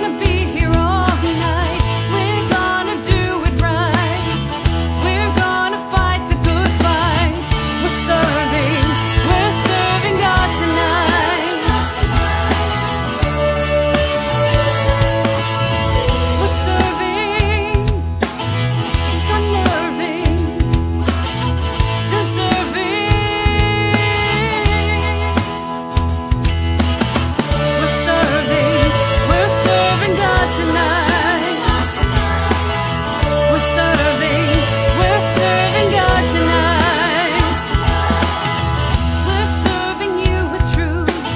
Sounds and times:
Music: 0.0s - 41.3s.

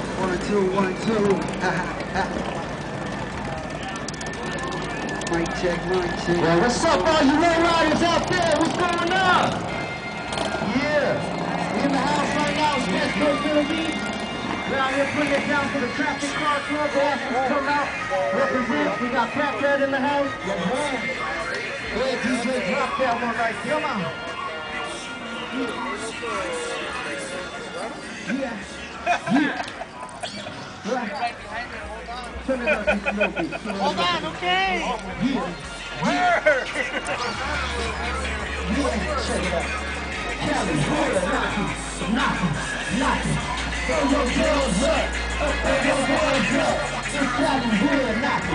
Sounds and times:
Vehicle: 0.0s - 48.5s
Music: 5.5s - 29.4s, 33.1s - 48.5s.

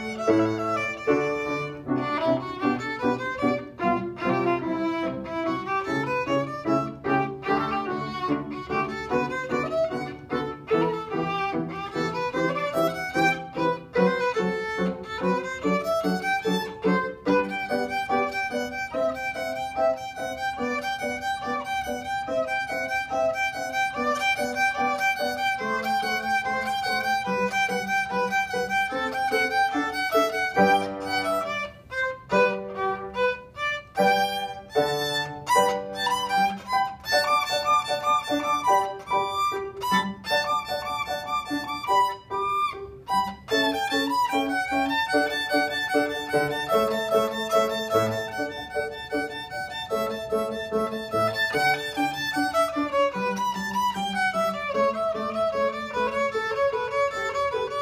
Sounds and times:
Violin, fiddle: 0.0s - 57.8s.

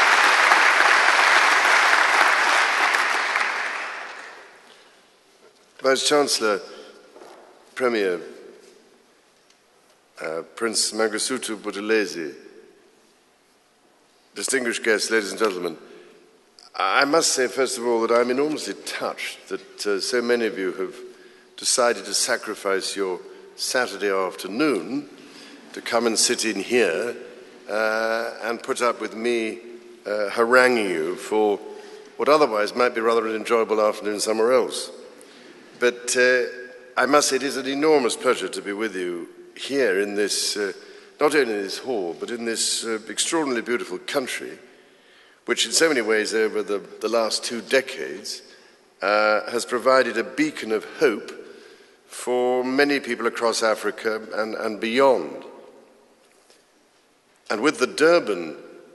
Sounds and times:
Male speech, man speaking: 5.8s - 6.8s, 7.8s - 8.4s, 10.2s - 12.4s, 14.4s - 15.8s, 16.7s - 25.1s, 25.7s - 35.0s, 35.8s - 44.6s, 45.5s - 51.4s, 52.1s - 55.5s, 57.5s - 58.6s.

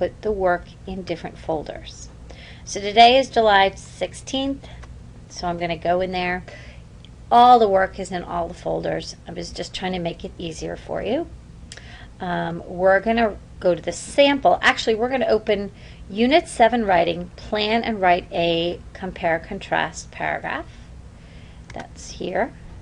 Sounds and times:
Speech: 0.0s - 2.1s, 2.7s - 6.5s, 7.3s - 11.3s, 12.2s - 20.7s, 21.7s - 22.6s.

